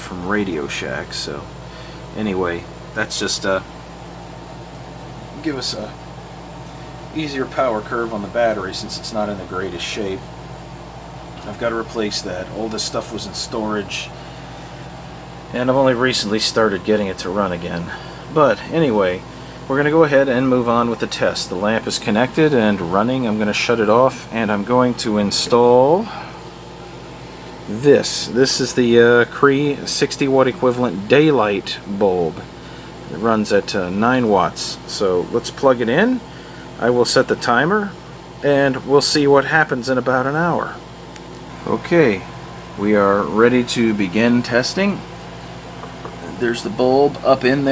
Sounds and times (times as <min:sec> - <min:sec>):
Speech: 0:00.0 - 0:03.7, 0:05.3 - 0:06.0, 0:07.1 - 0:10.3, 0:11.4 - 0:14.2, 0:15.5 - 0:26.4, 0:27.7 - 0:32.5, 0:33.1 - 0:40.9, 0:41.5 - 0:45.1, 0:46.1 - 0:47.7.